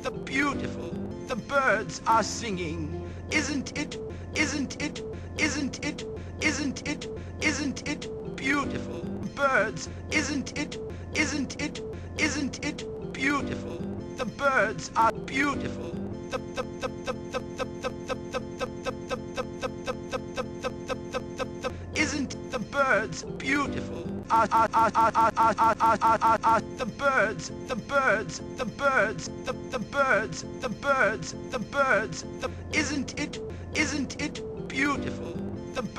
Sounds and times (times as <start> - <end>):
Speech: 0.0 - 16.0, 22.0 - 24.1, 26.8 - 35.9
Music: 0.0 - 35.9.